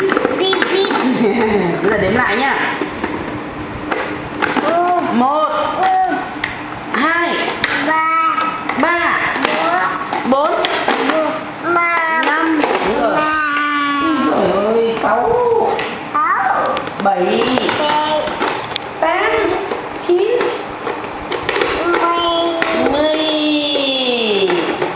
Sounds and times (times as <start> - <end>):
Child speech, kid speaking: 0.0 - 1.2, 4.6 - 5.2, 5.8 - 6.3, 7.7 - 8.6, 9.4 - 10.2, 11.0 - 14.5, 16.1 - 16.9, 17.6 - 18.4, 21.8 - 23.8.